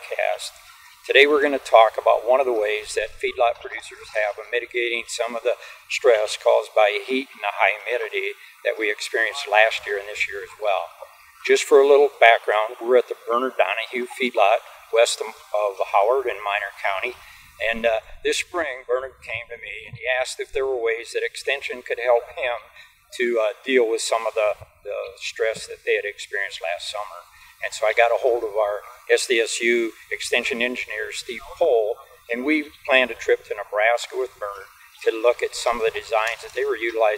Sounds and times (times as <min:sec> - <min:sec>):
Speech: 0:00.0 - 0:37.1.